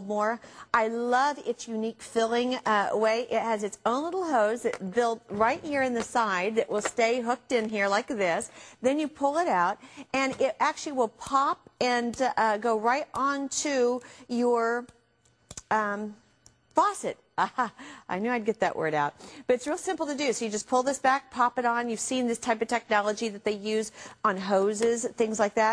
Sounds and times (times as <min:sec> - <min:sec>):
Speech: 0:00.0 - 0:14.9, 0:16.8 - 0:25.7.